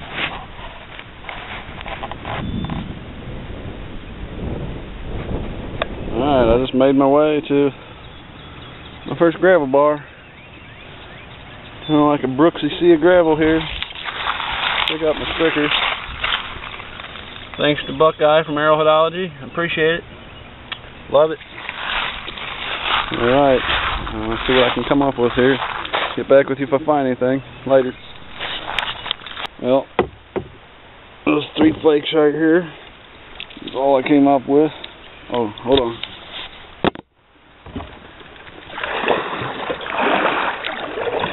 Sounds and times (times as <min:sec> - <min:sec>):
Speech: 0:06.2 - 0:07.8, 0:09.1 - 0:10.1, 0:11.9 - 0:13.7, 0:14.9 - 0:15.8, 0:17.6 - 0:20.0, 0:23.1 - 0:28.0, 0:31.3 - 0:32.8, 0:33.6 - 0:36.0.